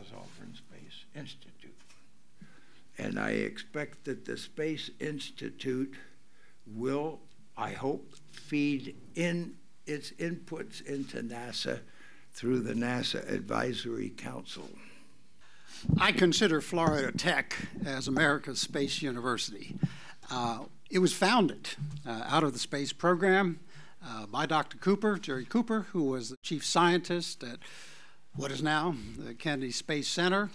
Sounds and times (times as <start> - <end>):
Speech: 0.0 - 1.8, 3.0 - 6.1, 6.7 - 14.9, 15.9 - 27.6, 28.4 - 30.5.